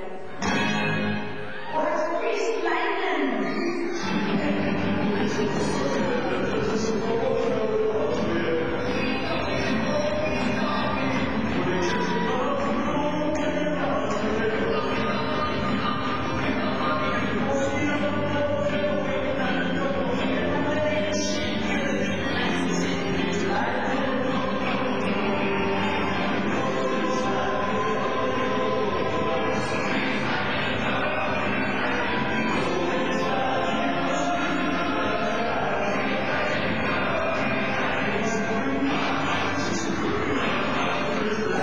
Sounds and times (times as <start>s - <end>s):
Rock and roll: 0.0s - 2.2s, 4.0s - 41.6s.